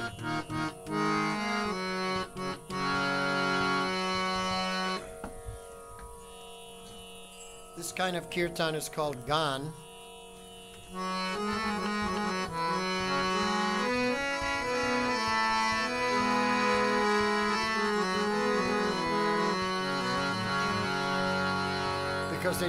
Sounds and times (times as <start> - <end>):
Music: 0.0 - 22.6
Speech: 7.8 - 9.8, 22.3 - 22.6.